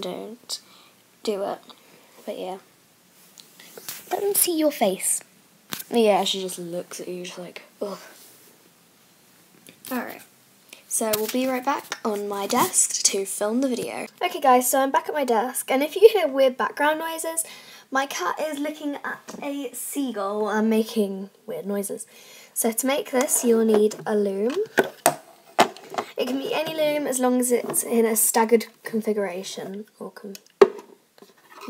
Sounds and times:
Speech: 0.0 - 0.6, 1.2 - 2.6, 4.1 - 8.2, 9.8 - 10.3, 10.9 - 24.8, 26.2 - 30.4.

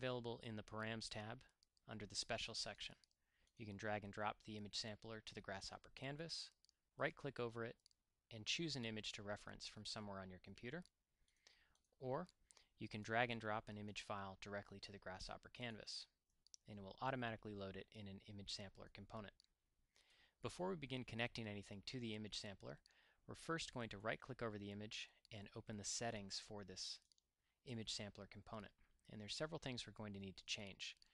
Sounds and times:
Speech: 0.0 - 11.0, 12.0 - 19.5, 20.4 - 31.1.

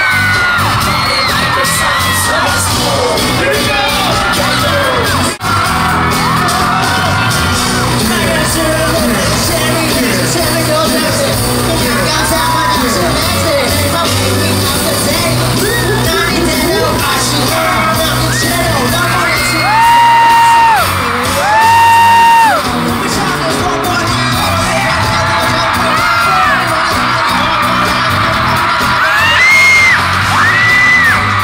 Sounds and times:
Music: 0.0 - 31.4.

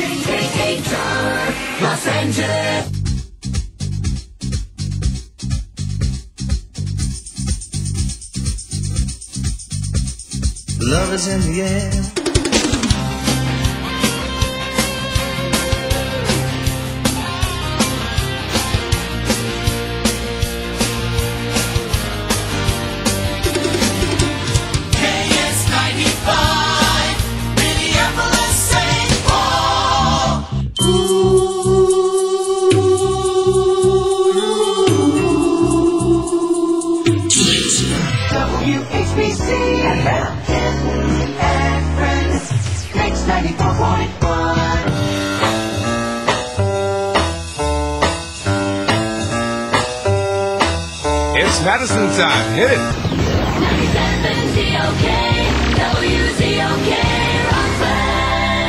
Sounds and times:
Music: 0.0 - 58.6.

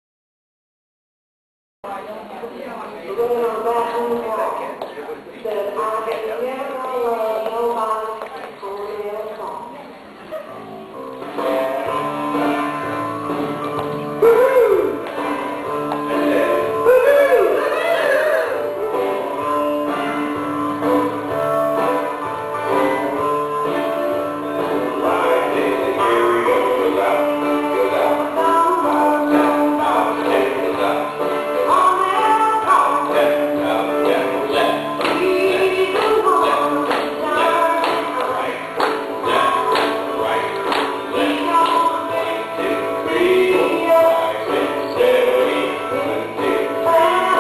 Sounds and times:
Blues: 10.2 - 47.4
Independent music: 10.3 - 47.4
Dance music: 32.6 - 47.4.

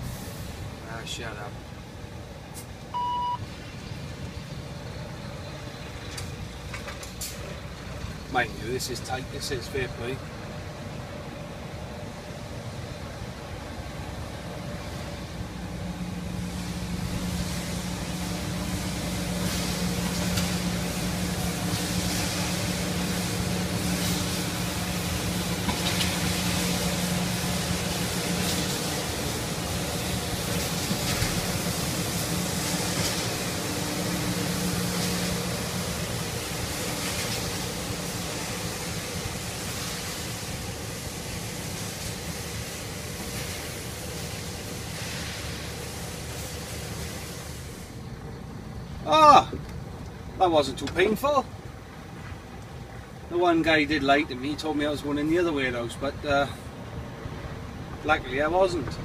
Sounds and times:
Vehicle: 0.0 - 59.0.

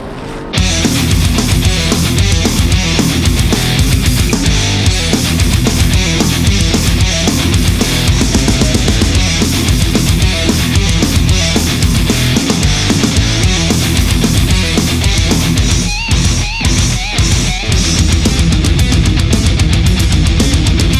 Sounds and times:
Music: 0.0 - 20.9.

